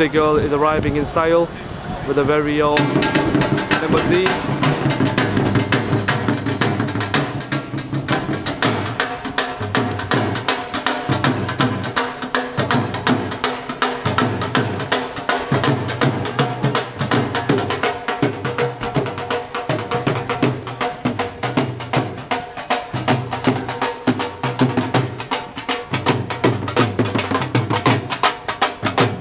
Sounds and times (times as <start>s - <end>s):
Music: 2.8s - 29.2s.